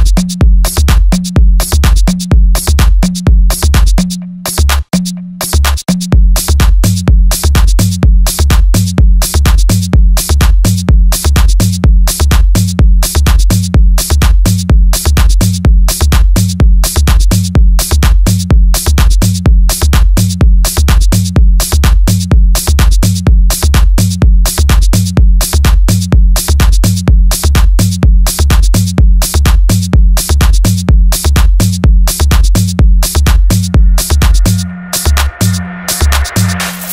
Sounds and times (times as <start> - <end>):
Dance music: 0.0 - 36.9
House music: 0.0 - 36.9.